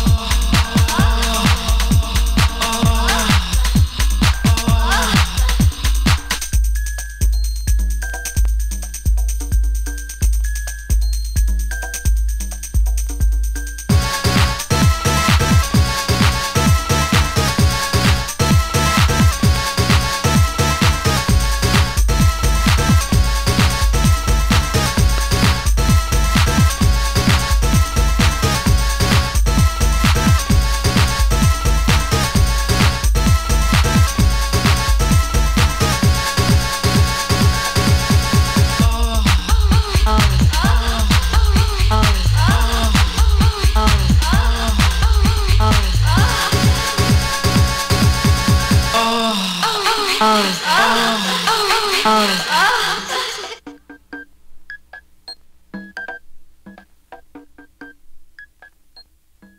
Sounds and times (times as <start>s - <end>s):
House music: 0.0s - 10.4s, 13.9s - 54.2s
Techno: 0.0s - 10.4s, 11.1s - 53.8s
Disco: 0.0s - 53.9s.